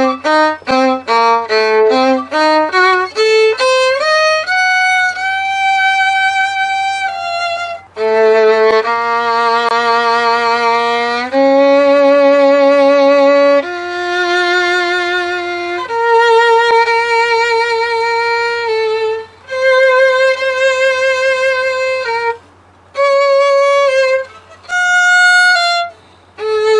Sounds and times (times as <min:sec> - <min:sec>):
Violin, fiddle: 0:00.0 - 0:26.7.